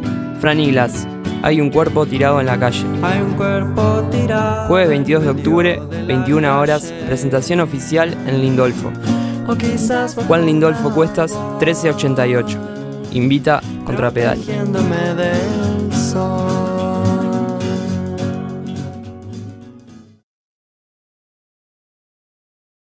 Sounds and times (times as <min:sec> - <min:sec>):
Music: 0:00.0 - 0:20.3
Speech: 0:00.4 - 0:03.4, 0:04.6 - 0:09.0, 0:09.8 - 0:15.0.